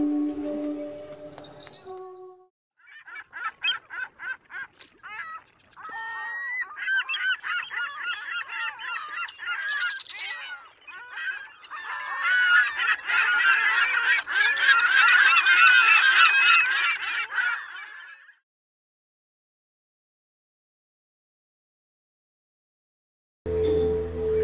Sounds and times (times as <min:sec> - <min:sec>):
Outside, rural or natural: 0:00.0 - 0:18.5, 0:23.5 - 0:24.4.